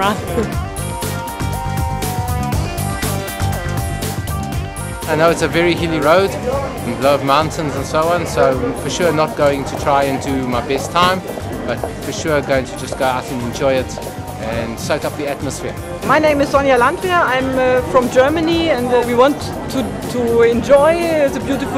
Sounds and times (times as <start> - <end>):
Music: 0.0 - 21.7.